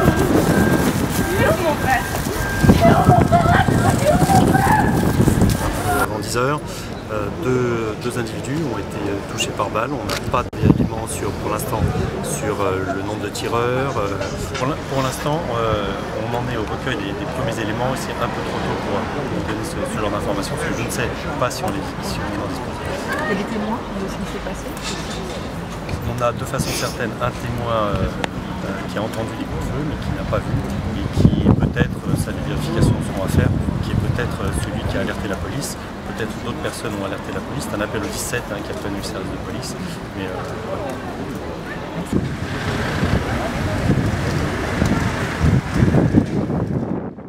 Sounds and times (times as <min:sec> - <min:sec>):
Speech: 0:26.0 - 0:42.2.